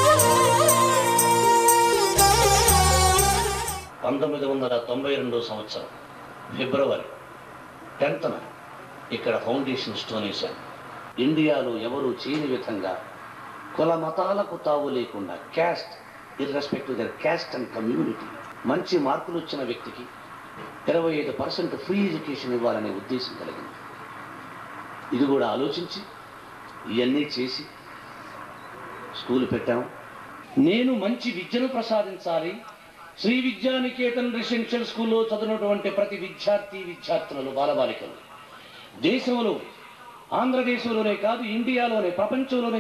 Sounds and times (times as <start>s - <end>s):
Music: 0.0s - 3.9s
Narration, monologue: 3.9s - 42.8s
Male speech, man speaking: 4.0s - 7.2s, 8.0s - 10.6s, 11.2s - 13.1s, 13.8s - 20.1s, 20.9s - 23.7s, 25.2s - 26.1s, 26.9s - 27.7s, 29.1s - 30.0s, 30.6s - 42.8s.